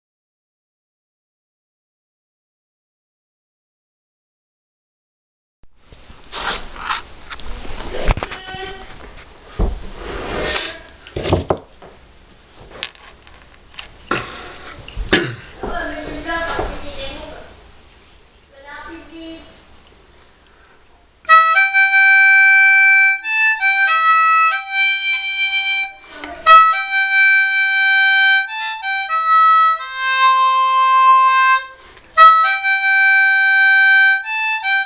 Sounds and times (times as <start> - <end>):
Speech: 8.2 - 9.0, 15.6 - 17.6, 18.5 - 19.6.